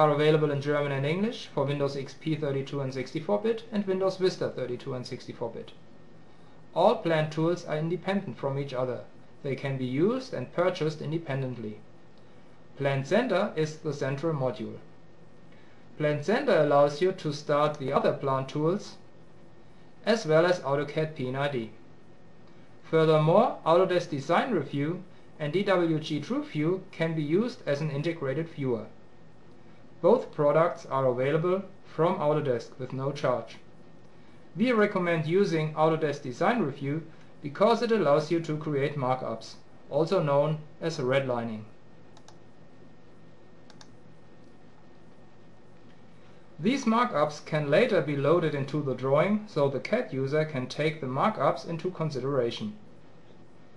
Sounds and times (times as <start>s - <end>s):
Speech: 0.0s - 5.8s, 6.7s - 11.9s, 12.8s - 14.9s, 16.0s - 19.1s, 20.0s - 21.8s, 22.8s - 29.0s, 30.0s - 33.7s, 34.6s - 41.8s, 46.6s - 52.9s.